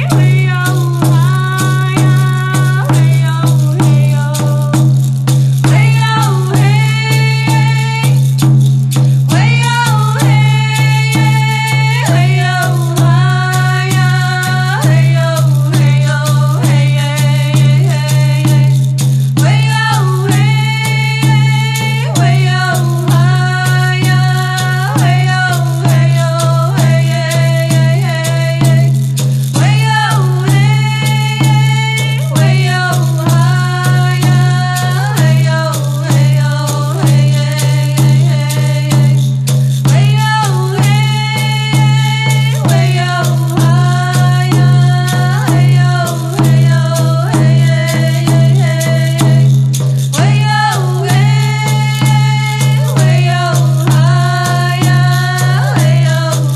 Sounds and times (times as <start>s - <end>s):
Female singing: 0.0s - 4.8s, 5.7s - 8.2s, 9.3s - 18.8s, 19.4s - 29.0s, 29.6s - 39.2s, 39.8s - 49.4s, 50.2s - 56.5s
Music: 0.0s - 56.5s.